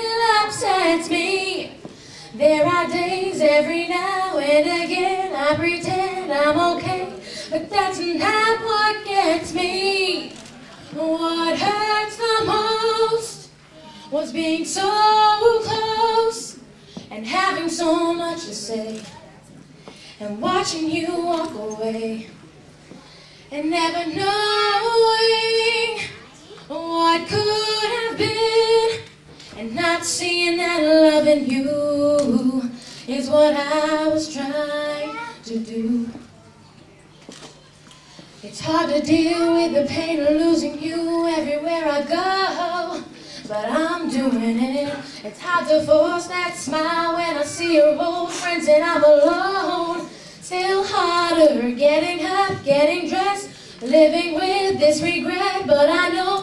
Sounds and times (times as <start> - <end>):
Female singing: 0.0 - 13.5, 14.1 - 19.1, 20.2 - 22.3, 23.5 - 36.3, 38.4 - 56.4
Speech: 18.4 - 19.7.